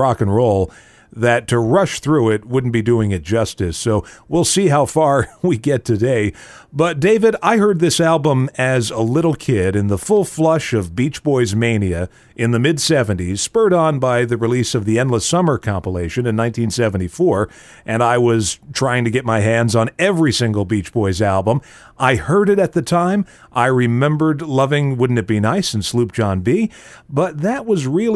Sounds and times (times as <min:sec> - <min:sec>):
Speech: 0:00.0 - 0:28.1.